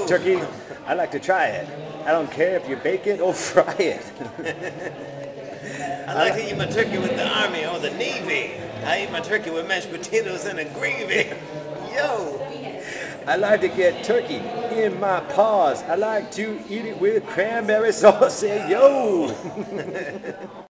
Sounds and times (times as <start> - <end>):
Speech: 5.9 - 20.7.